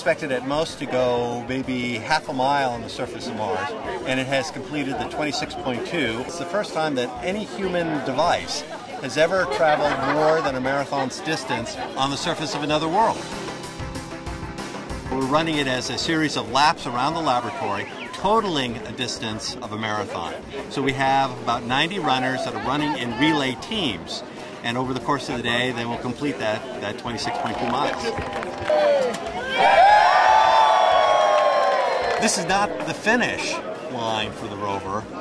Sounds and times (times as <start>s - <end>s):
Speech: 0.0s - 13.2s, 15.1s - 28.2s
Music: 0.0s - 35.2s
Outside, urban or manmade: 0.0s - 35.2s.